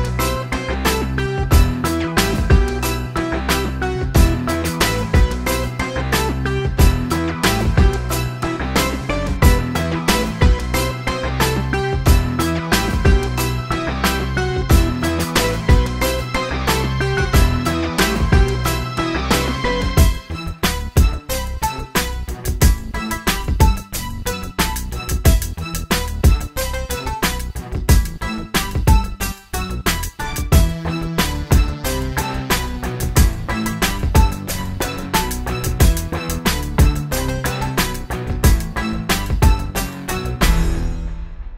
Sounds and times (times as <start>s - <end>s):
Music: 0.0s - 41.5s.